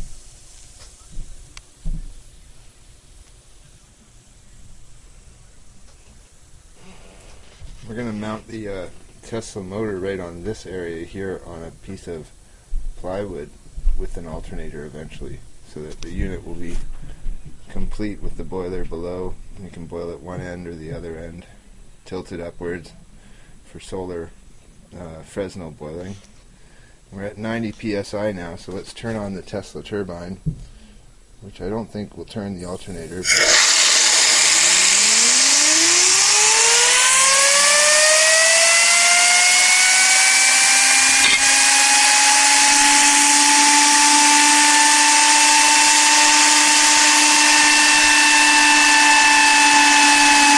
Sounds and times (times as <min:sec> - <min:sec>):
Steam: 0:00.0 - 0:01.3, 0:33.0 - 0:50.5
Speech: 0:07.8 - 0:12.4, 0:13.0 - 0:16.9, 0:17.7 - 0:23.0, 0:23.7 - 0:26.3, 0:27.1 - 0:30.5, 0:31.4 - 0:33.3
Engine: 0:33.3 - 0:50.5.